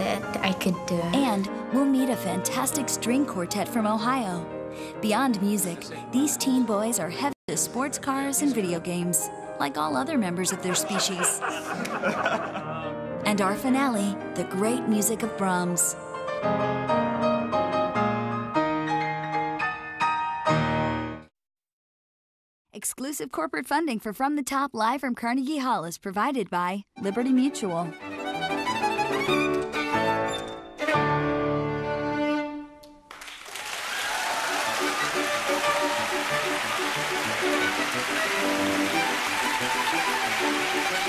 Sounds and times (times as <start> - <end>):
Music: 0.0 - 21.3, 26.9 - 41.0
Chuckle, chortle: 10.6 - 13.0.